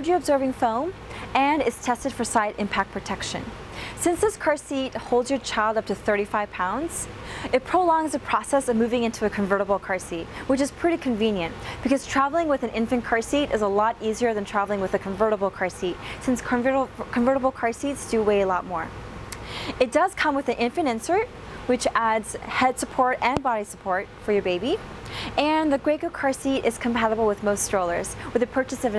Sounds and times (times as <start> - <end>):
Speech: 0.0 - 18.9, 19.8 - 24.8, 25.4 - 28.9.